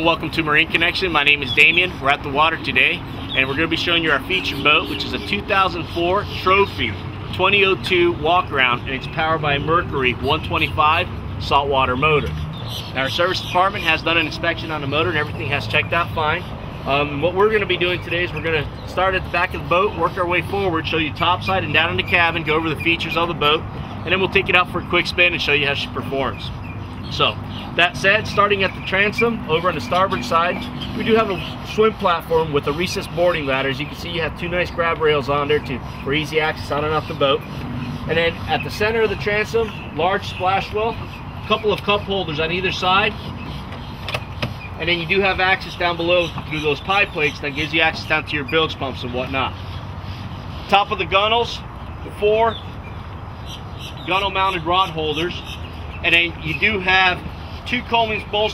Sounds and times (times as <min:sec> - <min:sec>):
Speech: 0:00.0 - 0:12.3, 0:13.0 - 0:26.5, 0:27.1 - 0:37.4, 0:38.1 - 0:43.2, 0:44.8 - 0:49.6, 0:50.7 - 0:52.6, 0:54.1 - 0:58.5
Motorboat, speedboat: 0:00.0 - 0:49.5.